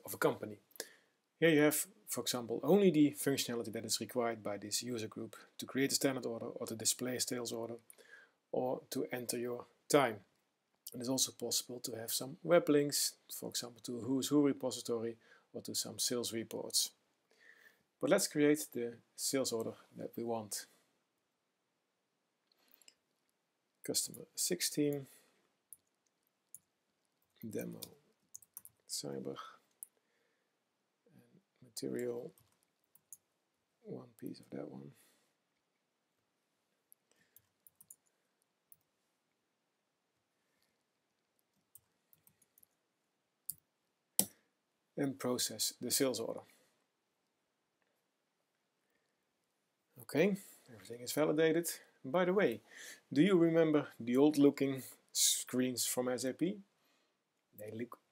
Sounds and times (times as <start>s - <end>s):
Speech: 0.0s - 0.6s, 1.4s - 7.8s, 8.6s - 10.3s, 10.9s - 17.0s, 18.0s - 20.8s, 23.9s - 25.1s, 27.4s - 27.9s, 28.9s - 29.6s, 31.6s - 32.4s, 33.8s - 35.0s, 45.0s - 46.5s, 50.0s - 56.7s, 57.6s - 58.0s.